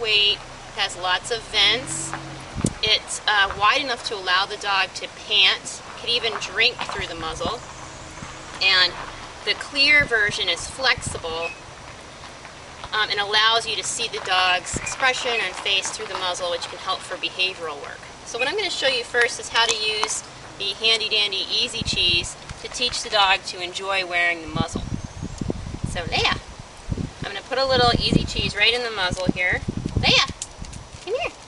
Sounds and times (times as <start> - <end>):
Speech: 0.0 - 2.2, 2.8 - 7.6, 8.6 - 11.6, 12.9 - 24.8, 25.9 - 26.4, 27.2 - 30.4, 31.0 - 31.4.